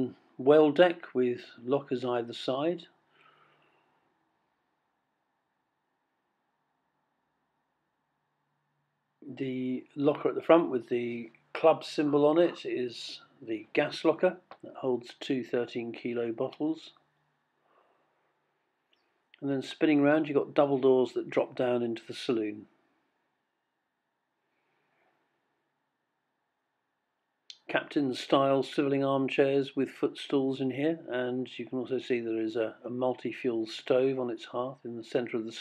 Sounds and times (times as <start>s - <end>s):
Speech: 0.0s - 3.0s, 9.2s - 17.0s, 19.4s - 22.7s, 27.5s - 35.6s.